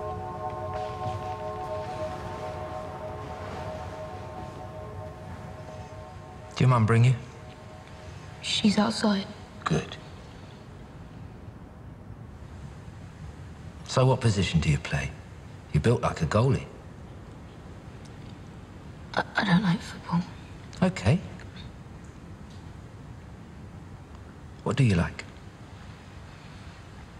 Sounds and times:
Music: 0.0s - 10.8s.

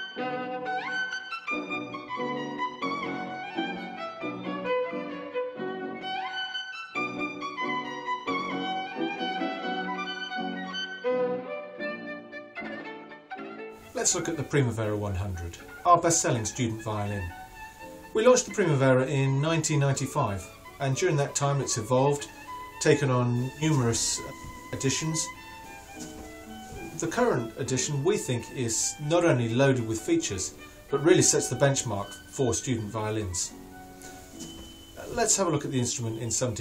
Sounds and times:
Violin, fiddle: 0.0s - 36.6s.

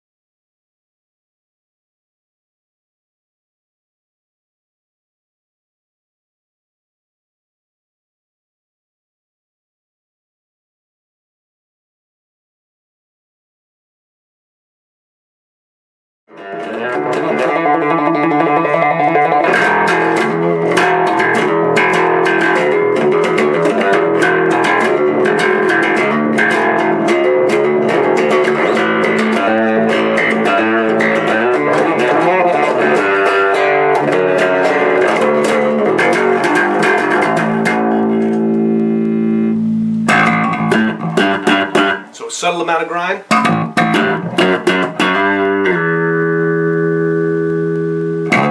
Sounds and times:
Electric guitar: 16.3s - 42.2s, 43.2s - 48.5s
Strum: 16.3s - 48.5s.

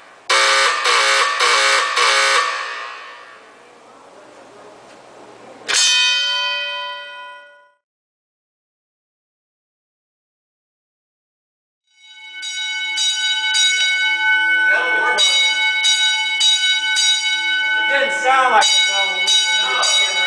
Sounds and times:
Speech: 3.5s - 5.7s, 14.7s - 15.6s, 17.9s - 20.2s.

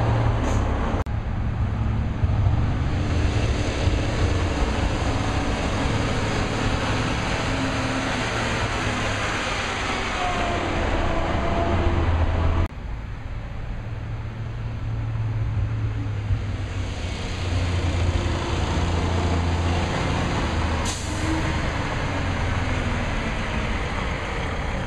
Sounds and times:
Truck: 0.0s - 24.8s.

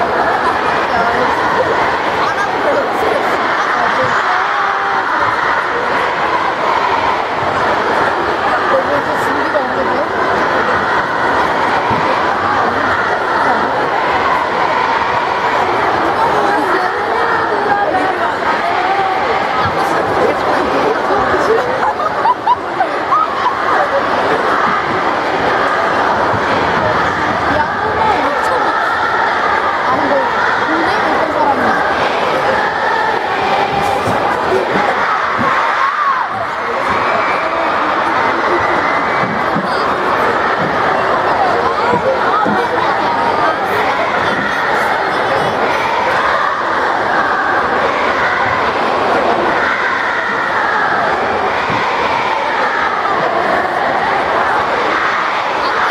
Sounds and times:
Speech: 0.0s - 55.9s.

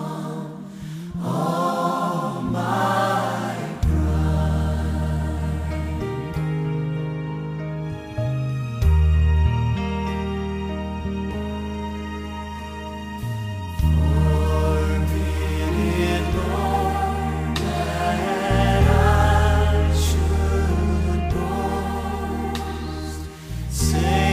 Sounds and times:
Tender music: 0.0s - 24.3s
Sad music: 0.6s - 24.3s.

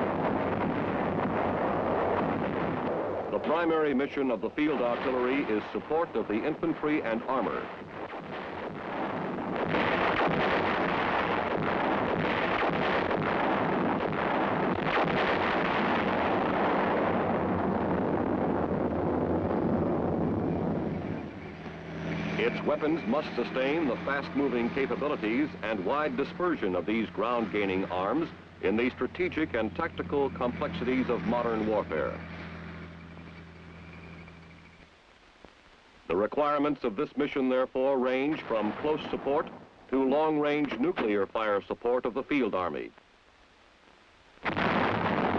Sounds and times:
Artillery fire: 0.0s - 34.3s, 38.3s - 39.7s, 44.4s - 45.3s
Speech: 3.3s - 7.7s, 22.4s - 32.2s, 36.1s - 43.0s.

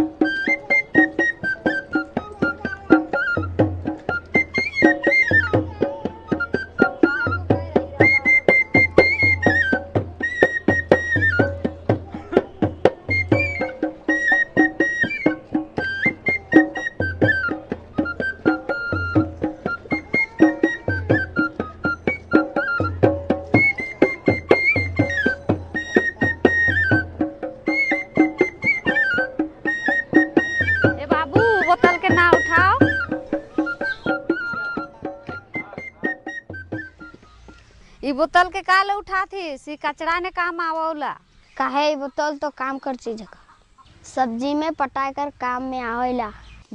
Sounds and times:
Music: 0.0s - 37.7s.

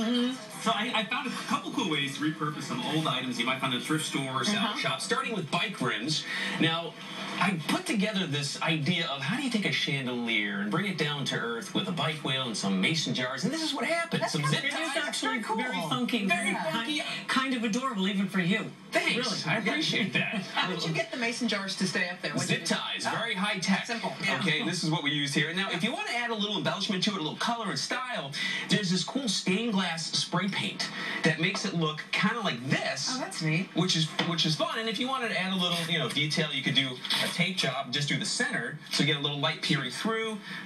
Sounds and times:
Speech: 0.0s - 40.6s.

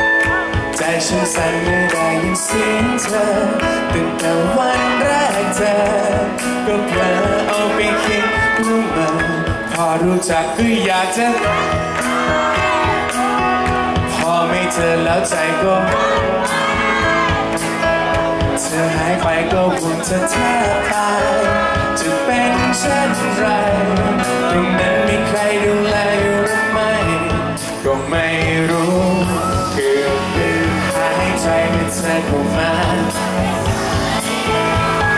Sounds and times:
Music: 0.0s - 35.1s
Male singing: 0.7s - 12.9s, 14.0s - 17.1s, 18.5s - 35.1s.

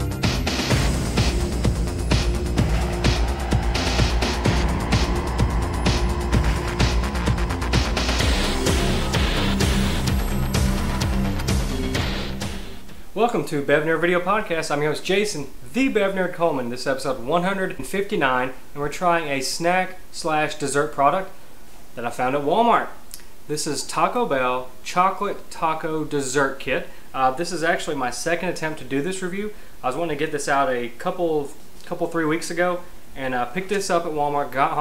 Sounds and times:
Speech: 13.2s - 21.4s, 22.0s - 34.8s.

